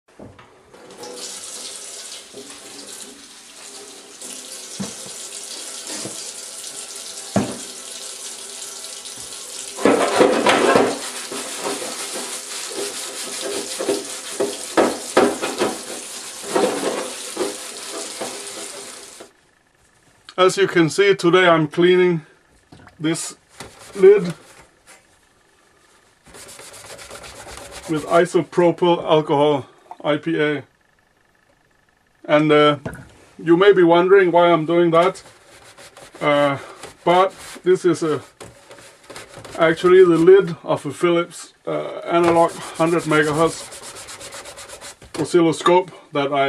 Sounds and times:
Water tap, faucet: 0:00.8 - 0:19.3, 0:42.5 - 0:45.0.

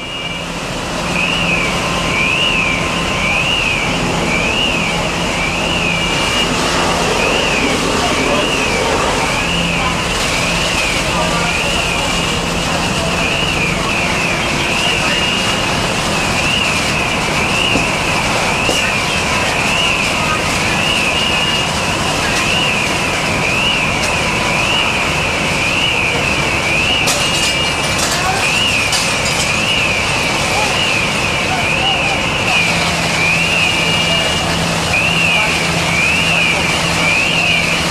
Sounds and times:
Crackle: 0:01.2 - 0:37.9
Speech: 0:06.4 - 0:37.9.

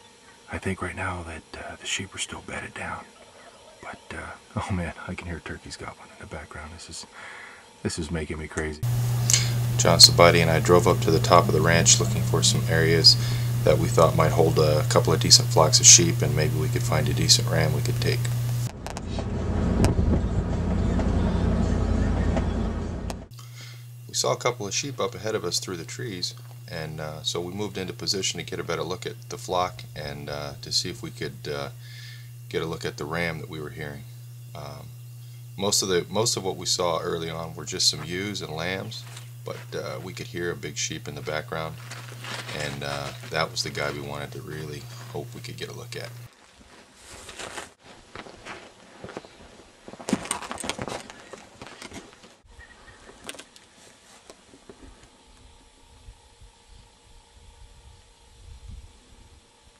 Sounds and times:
Speech: 0:00.5 - 0:03.1, 0:03.8 - 0:07.1, 0:07.8 - 0:08.8, 0:09.7 - 0:18.3, 0:24.1 - 0:31.8, 0:32.5 - 0:34.9, 0:35.6 - 0:41.8, 0:42.5 - 0:46.3.

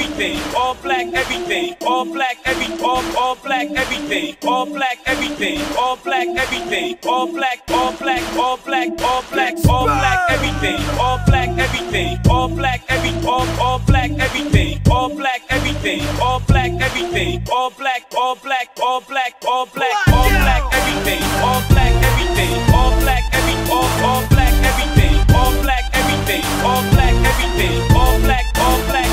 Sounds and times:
Music: 0:00.0 - 0:29.1.

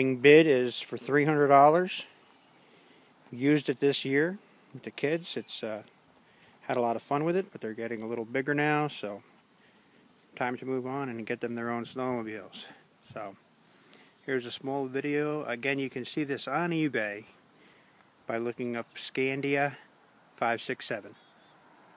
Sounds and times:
Speech: 0:00.0 - 0:02.1, 0:03.3 - 0:05.9, 0:06.7 - 0:09.2, 0:10.4 - 0:13.4, 0:14.3 - 0:17.4, 0:18.3 - 0:21.2.

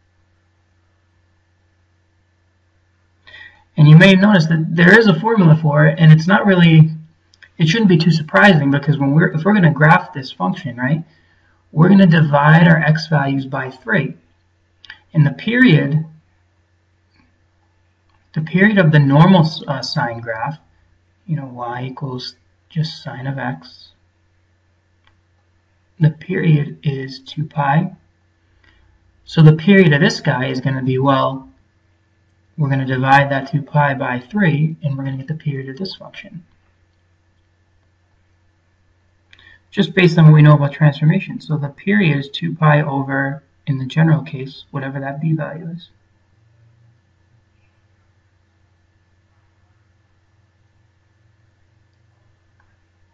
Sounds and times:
Speech: 0:03.8 - 0:11.1, 0:11.8 - 0:14.2, 0:15.0 - 0:16.2, 0:18.4 - 0:20.7, 0:21.3 - 0:24.0, 0:26.0 - 0:28.0, 0:29.3 - 0:31.6, 0:32.6 - 0:36.5, 0:39.7 - 0:46.0.

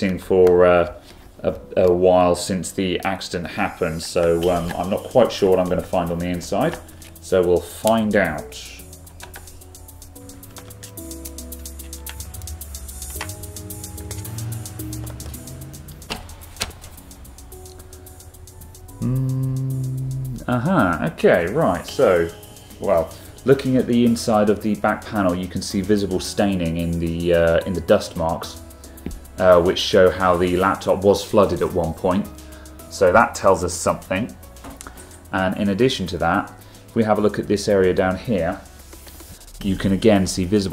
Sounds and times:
Speech: 0:00.0 - 0:08.9, 0:20.4 - 0:28.6, 0:29.4 - 0:32.3, 0:32.9 - 0:34.4, 0:35.4 - 0:38.7, 0:39.6 - 0:40.7
Music: 0:00.0 - 0:40.7.

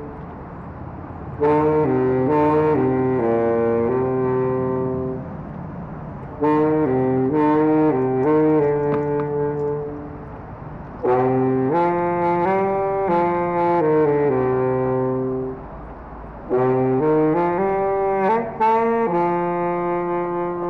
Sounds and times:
Outside, rural or natural: 0:00.0 - 0:20.6.

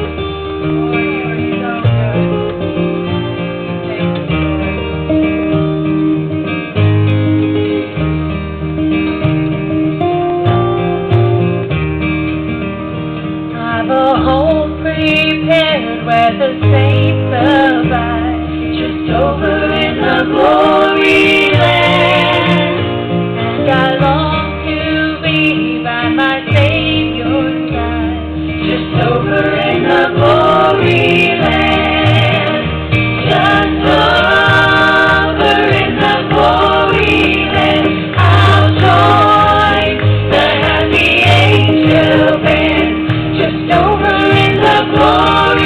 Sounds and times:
Country: 0:00.0 - 0:45.6
Singing: 0:13.7 - 0:22.9, 0:33.3 - 0:45.6.

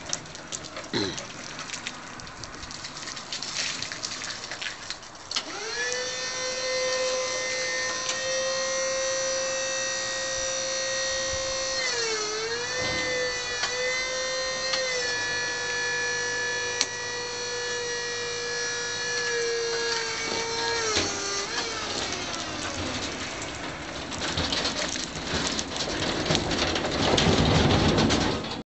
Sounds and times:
Vehicle: 0:00.0 - 0:28.6.

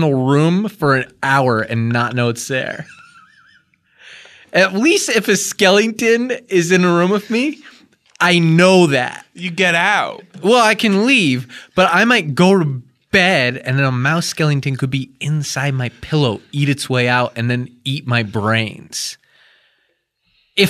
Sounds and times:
Speech: 0:00.0 - 0:02.9, 0:04.5 - 0:19.2.

